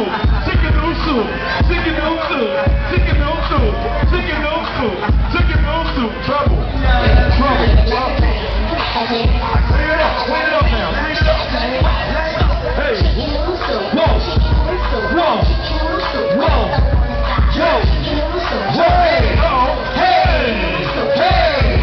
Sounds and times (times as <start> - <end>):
Music: 0.0 - 21.8.